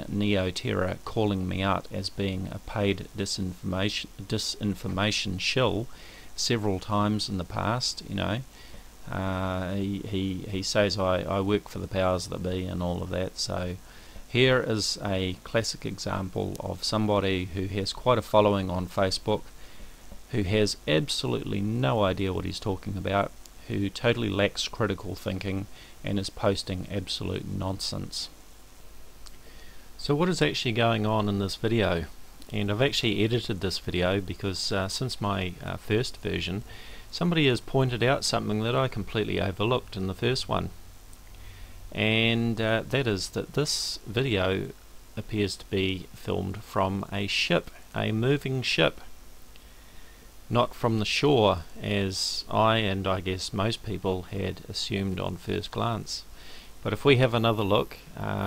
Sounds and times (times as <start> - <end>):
Speech: 0.0 - 19.5, 20.3 - 28.4, 30.0 - 40.8, 41.9 - 49.2, 50.5 - 58.4.